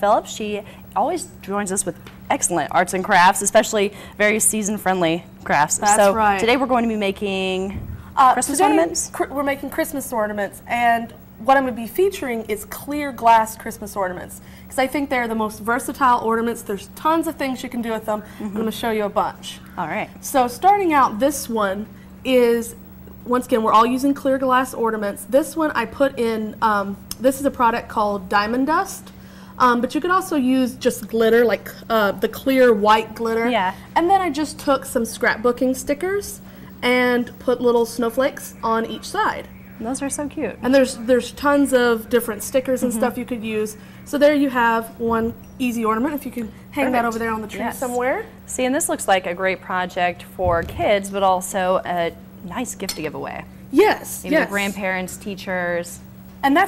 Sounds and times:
Speech: 0.0 - 29.0, 29.6 - 56.6.

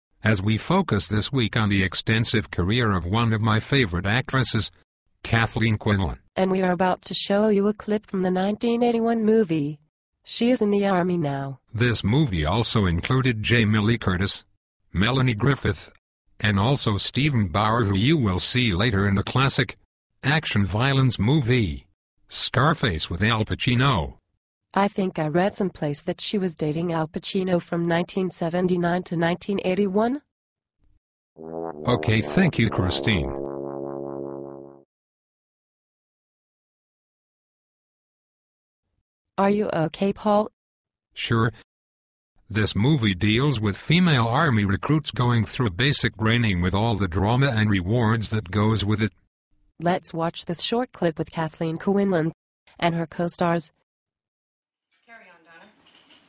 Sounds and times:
Speech synthesizer: 0.2 - 24.2, 24.8 - 30.3, 31.9 - 33.4, 39.4 - 40.5, 41.2 - 41.7, 42.5 - 49.2, 49.8 - 53.8, 55.1 - 55.8.

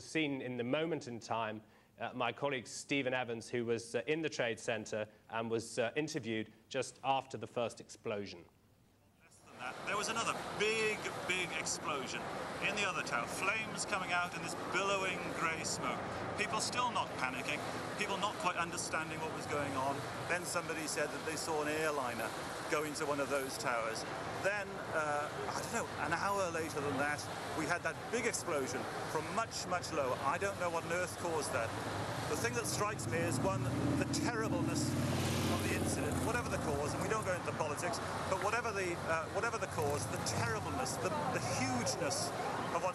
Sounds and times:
Speech: 0.0 - 8.5, 9.3 - 31.7, 32.3 - 34.9, 35.5 - 42.9.

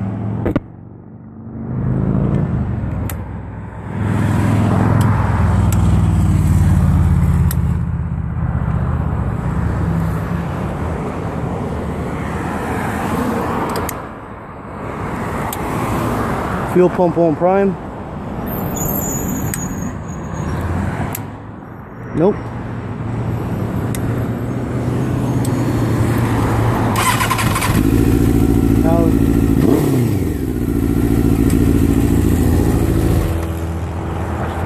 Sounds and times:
Motorcycle: 0.0 - 10.8, 23.8 - 34.6
Outside, urban or manmade: 0.0 - 34.6.

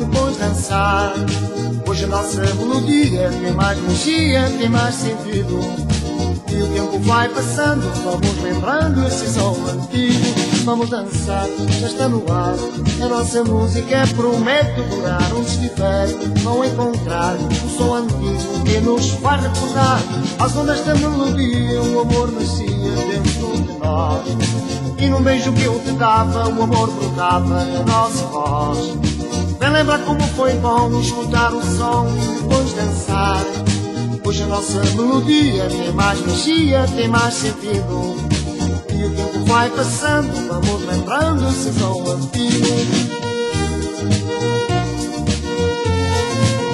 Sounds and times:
Music: 0.0 - 46.7.

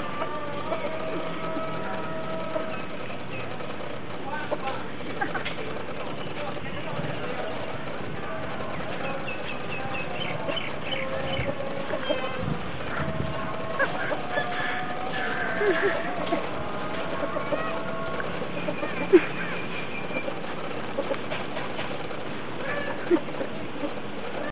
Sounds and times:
Chicken, rooster: 9.0 - 21.3, 22.6 - 24.5.

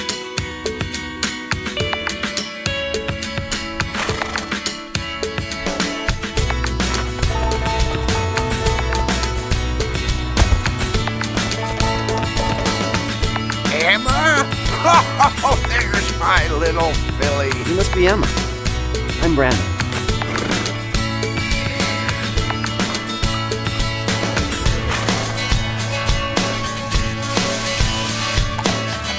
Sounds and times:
Music: 0.0 - 29.1
Speech: 13.7 - 18.4.

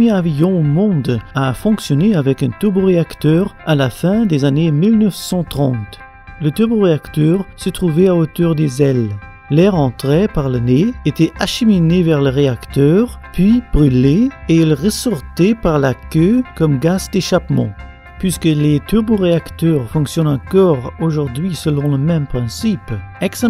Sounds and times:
Speech: 0.0 - 23.4.

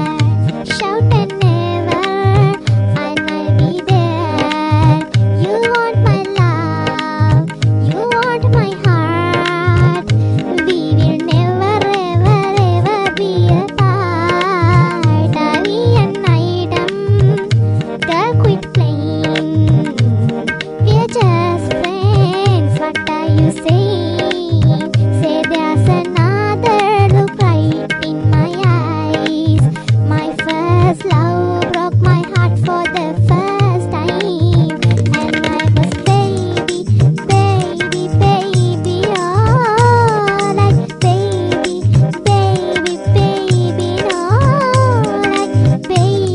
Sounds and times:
Music: 0.0 - 46.3.

